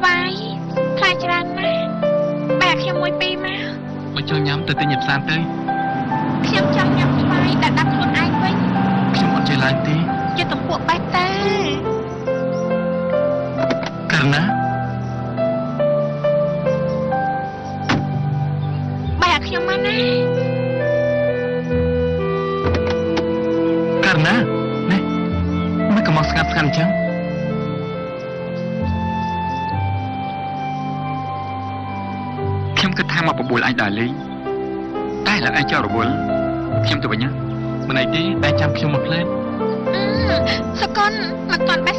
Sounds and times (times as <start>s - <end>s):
Music: 0.0s - 41.9s.